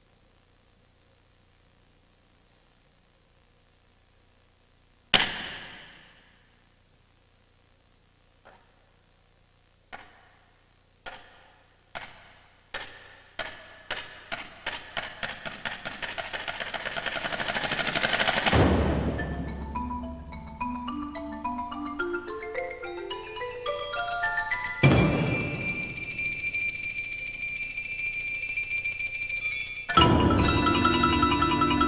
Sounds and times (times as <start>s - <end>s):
Vibraphone: 19.1s - 31.8s.